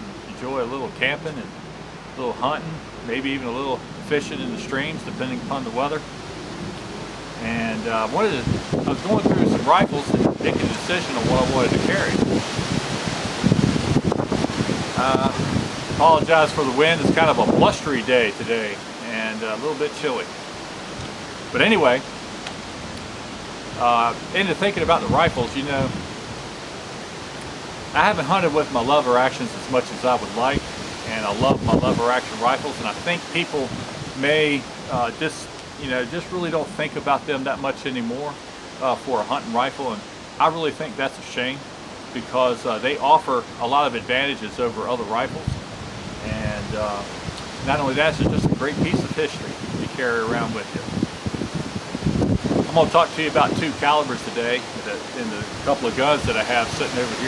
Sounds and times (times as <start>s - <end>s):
Pink noise: 0.0s - 57.2s
Speech: 0.3s - 1.5s, 2.2s - 6.0s, 7.4s - 12.2s, 15.0s - 15.4s, 16.0s - 20.3s, 21.6s - 22.0s, 23.8s - 26.0s, 28.0s - 41.6s, 42.2s - 45.6s, 46.2s - 50.9s, 52.7s - 57.2s.